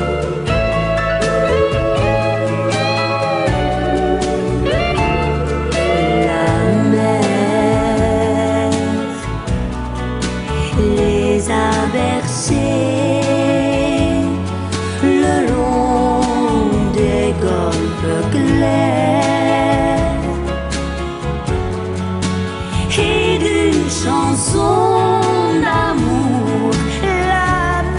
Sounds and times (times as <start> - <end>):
Christmas music: 0.0 - 27.9.